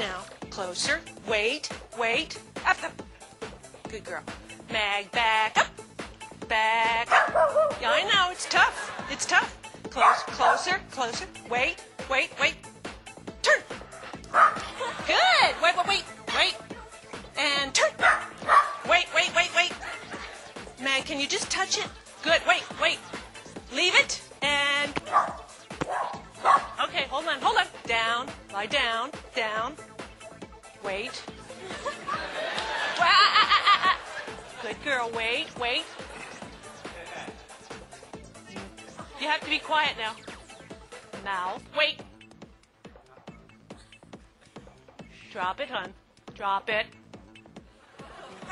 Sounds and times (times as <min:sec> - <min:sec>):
Bow-wow: 0:07.1 - 0:07.8, 0:10.0 - 0:10.6, 0:14.4 - 0:14.6, 0:18.0 - 0:18.8, 0:25.1 - 0:26.8
Speech: 0:07.8 - 0:12.6, 0:15.1 - 0:16.6, 0:17.4 - 0:18.0, 0:26.8 - 0:29.8, 0:34.6 - 0:35.9, 0:38.5 - 0:40.2, 0:41.2 - 0:42.0, 0:45.3 - 0:46.9.